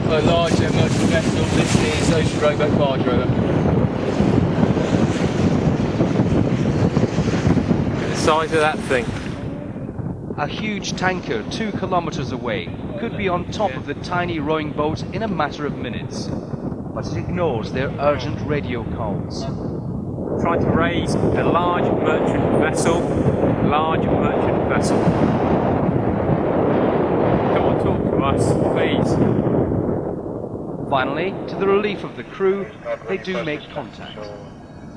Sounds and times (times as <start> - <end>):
Speech: 0.0 - 3.4, 8.0 - 9.7, 10.4 - 16.3, 17.0 - 19.5, 20.4 - 25.2, 27.5 - 29.4, 30.9 - 34.5.